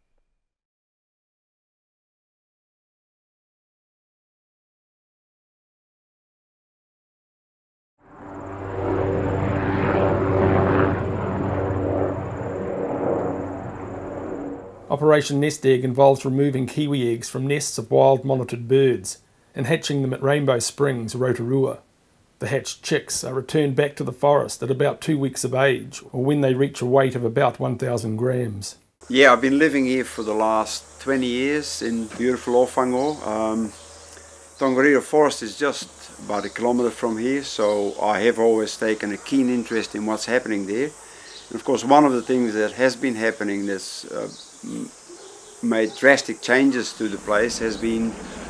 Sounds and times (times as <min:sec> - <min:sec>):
Speech: 0:14.9 - 0:21.8, 0:22.4 - 0:33.7, 0:34.6 - 0:44.9, 0:45.6 - 0:48.2.